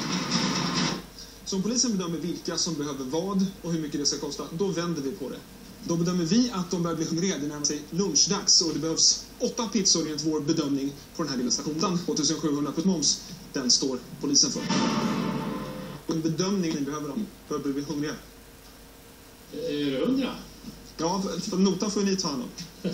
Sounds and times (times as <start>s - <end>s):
Speech: 1.5s - 14.7s, 16.1s - 18.3s, 19.6s - 22.6s.